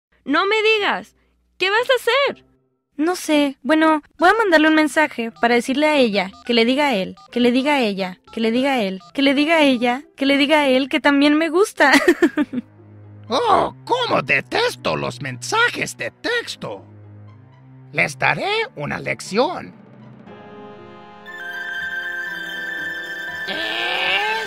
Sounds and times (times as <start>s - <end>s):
Music: 0.4s - 3.4s, 4.2s - 24.4s
Speech: 3.0s - 11.8s, 18.0s - 19.8s.